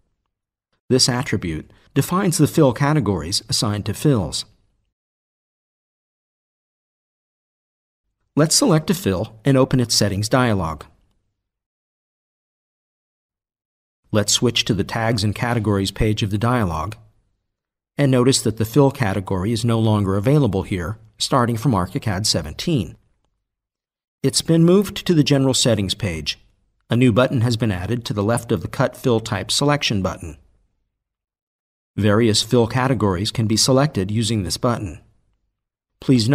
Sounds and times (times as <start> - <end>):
Speech: 0.9 - 4.6, 8.4 - 11.0, 14.1 - 17.1, 18.0 - 23.0, 24.2 - 30.5, 32.0 - 35.1, 36.0 - 36.3.